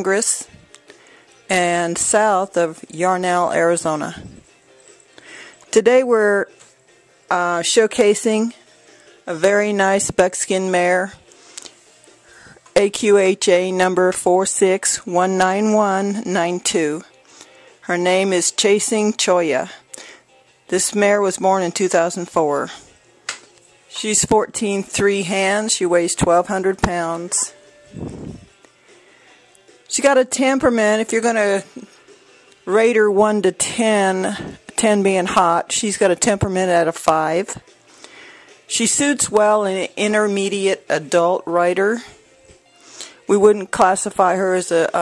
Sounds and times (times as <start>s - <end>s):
Speech: 0.0s - 0.5s, 1.5s - 4.3s, 5.7s - 6.5s, 7.3s - 8.6s, 9.3s - 11.2s, 12.8s - 17.1s, 17.9s - 19.8s, 20.7s - 22.8s, 23.9s - 27.6s, 29.9s - 31.9s, 32.7s - 37.6s, 38.7s - 42.1s, 43.3s - 45.0s
Music: 0.0s - 45.0s.